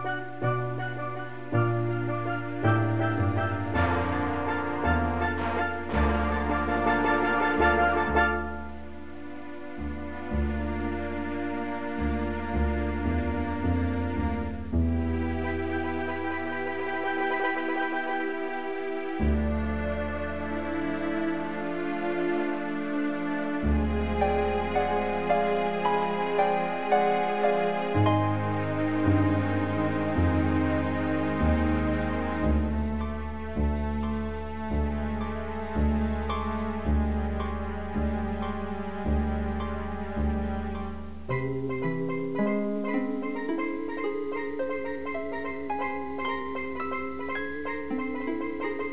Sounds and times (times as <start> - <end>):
Tender music: 0.0 - 48.9.